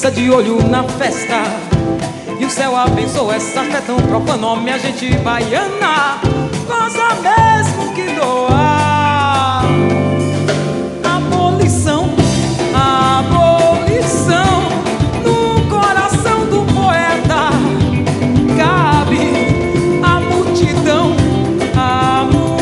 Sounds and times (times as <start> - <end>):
Afrobeat: 0.0 - 22.6
Musical instrument: 0.0 - 22.6
Singing: 2.3 - 9.7, 18.5 - 22.6.